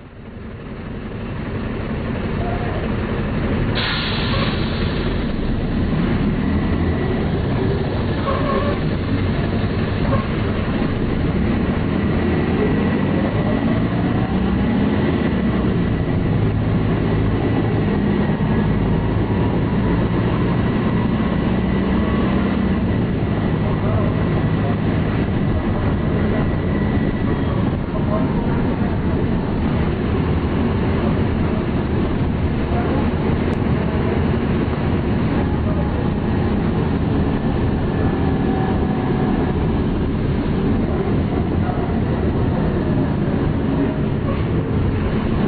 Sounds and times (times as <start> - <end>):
Bus: 0.0 - 45.4.